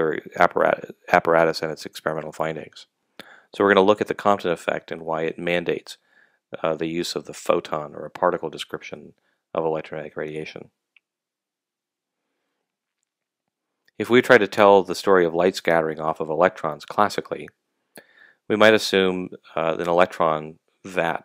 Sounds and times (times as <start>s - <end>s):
Speech: 0.0s - 2.8s, 3.4s - 6.0s, 6.6s - 10.7s, 14.0s - 17.5s, 18.5s - 21.2s.